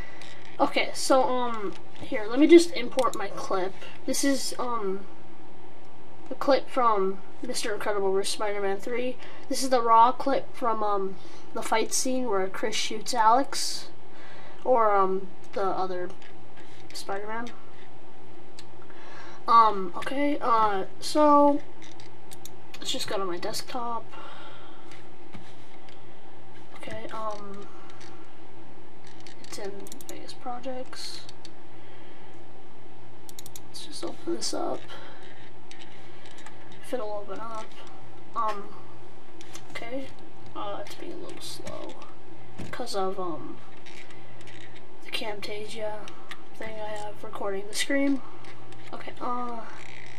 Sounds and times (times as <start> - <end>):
Speech: 0.6 - 5.1, 6.3 - 14.0, 14.6 - 16.2, 16.9 - 17.6, 19.5 - 21.7, 22.8 - 24.2, 26.8 - 27.7, 29.5 - 31.3, 33.7 - 35.1, 36.8 - 37.8, 38.4 - 38.8, 39.7 - 42.1, 42.7 - 43.6, 45.1 - 48.3, 48.9 - 49.9.